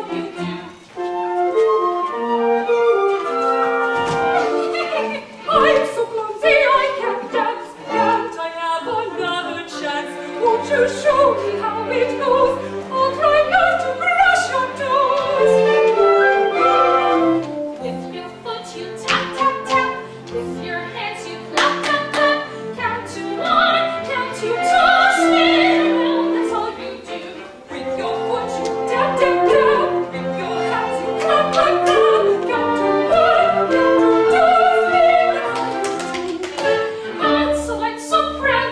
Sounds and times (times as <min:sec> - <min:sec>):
Inside, large room or hall: 0:00.0 - 0:38.7
Music: 0:00.0 - 0:38.7.